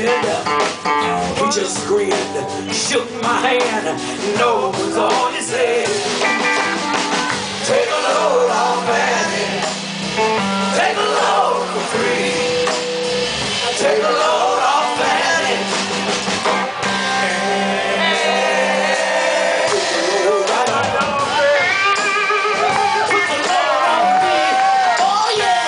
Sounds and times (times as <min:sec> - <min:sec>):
Jazz: 0:00.0 - 0:25.6.